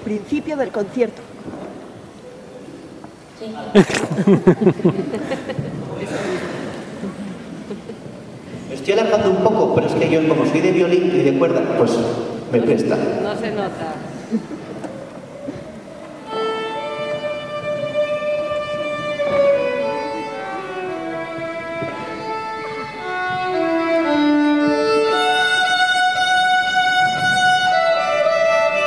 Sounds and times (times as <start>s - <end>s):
Violin, fiddle: 16.2s - 28.8s.